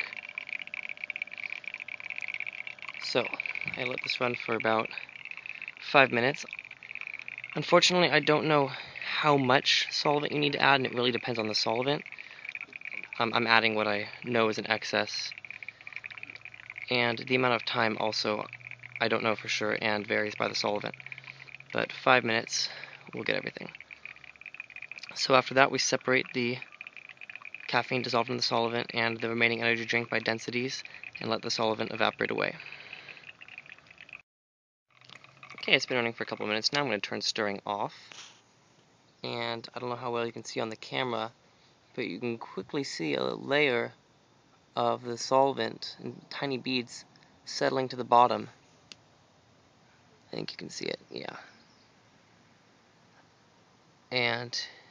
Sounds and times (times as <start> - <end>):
Outside, rural or natural: 0.0 - 34.3, 34.9 - 54.9
Speech: 3.0 - 5.0, 5.8 - 6.5, 7.6 - 12.0, 13.2 - 15.3, 16.9 - 20.9, 21.8 - 23.7, 25.1 - 26.6, 27.7 - 32.6, 35.6 - 38.0, 39.2 - 41.3, 42.0 - 44.0, 44.8 - 48.6, 50.3 - 51.5, 54.1 - 54.8.